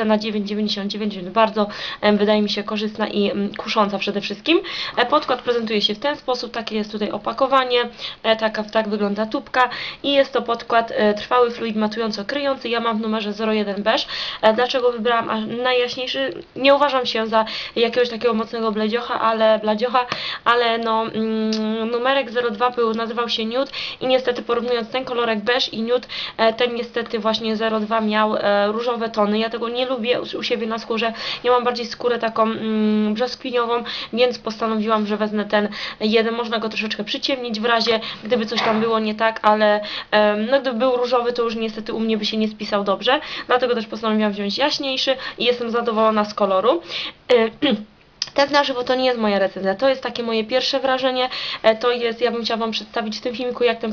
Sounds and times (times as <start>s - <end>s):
Speech: 0.0s - 53.9s.